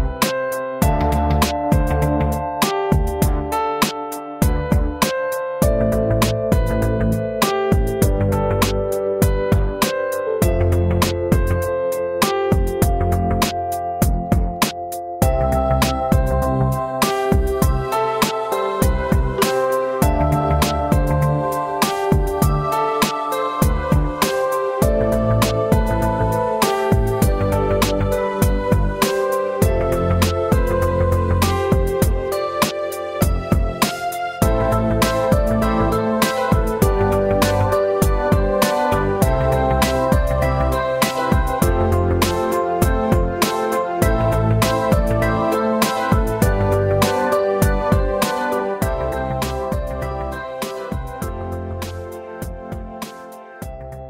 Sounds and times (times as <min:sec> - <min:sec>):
Background music: 0:00.0 - 0:54.1
Soundtrack music: 0:04.5 - 0:54.1.